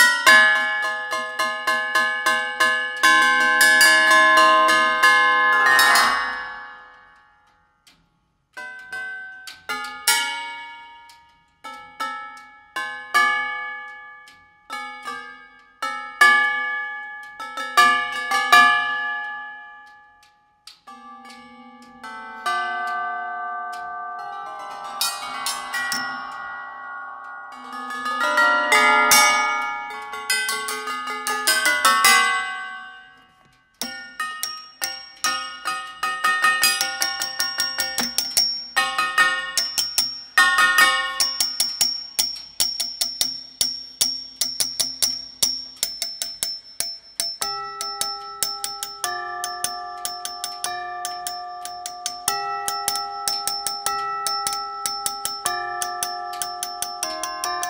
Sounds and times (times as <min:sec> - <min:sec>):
Tubular bells: 0:00.0 - 0:07.3, 0:20.9 - 0:57.7.